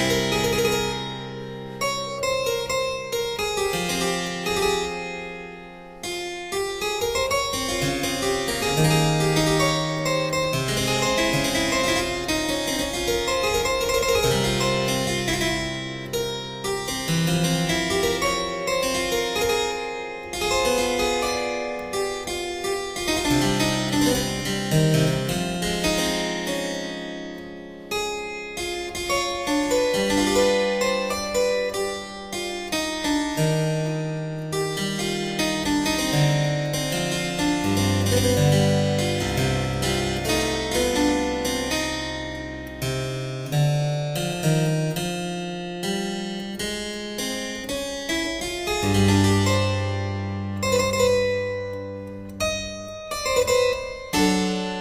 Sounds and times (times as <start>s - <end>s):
Harpsichord: 0.0s - 54.8s.